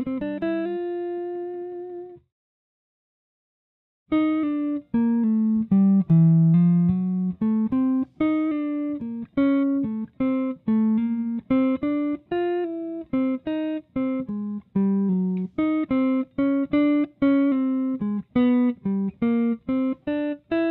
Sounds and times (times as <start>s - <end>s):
Guitar: 0.0s - 2.3s, 4.1s - 20.7s.